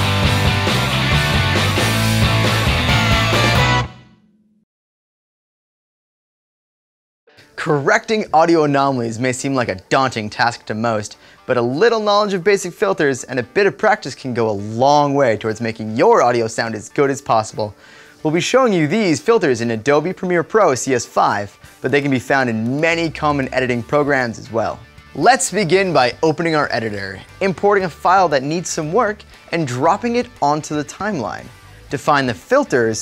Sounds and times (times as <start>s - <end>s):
Music: 0.0s - 4.7s, 7.3s - 33.0s
Speech: 7.6s - 33.0s.